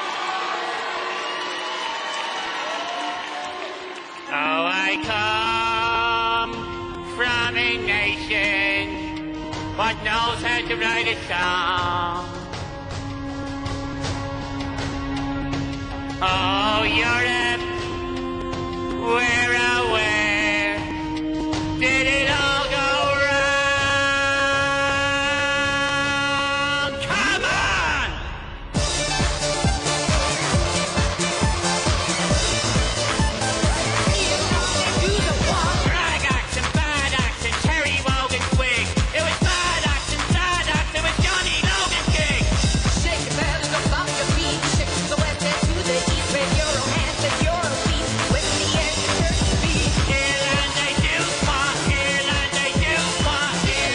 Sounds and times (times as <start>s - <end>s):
Music: 0.0s - 53.9s.